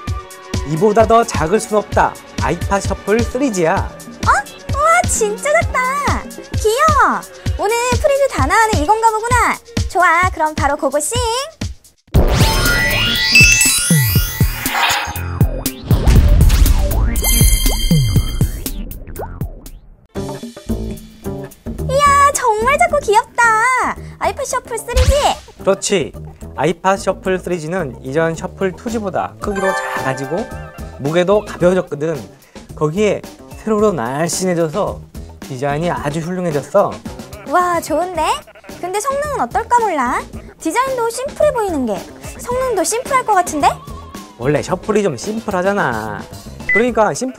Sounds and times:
Music: 0.0 - 47.3
Speech: 0.7 - 11.6, 21.9 - 30.4, 31.0 - 43.8, 44.4 - 47.3.

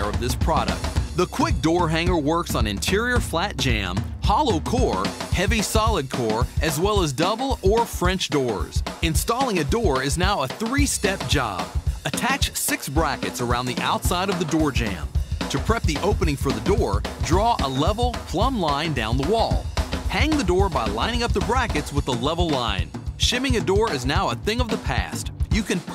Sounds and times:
Music: 0.0 - 25.9
Speech: 0.0 - 25.9.

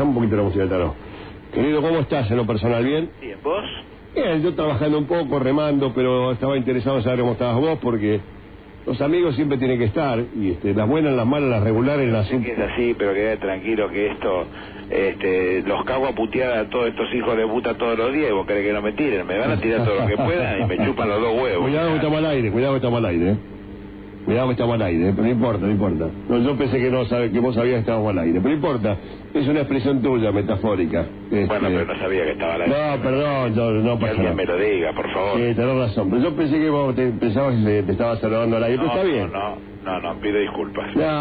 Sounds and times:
Speech: 0.0 - 8.3, 8.9 - 23.5, 24.3 - 41.2.

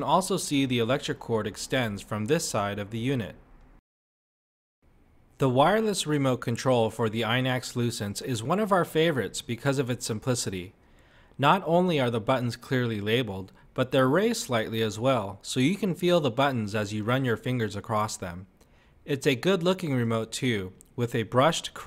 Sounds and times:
Speech: 0.0 - 3.4, 5.4 - 10.7, 11.4 - 18.5, 19.1 - 21.8.

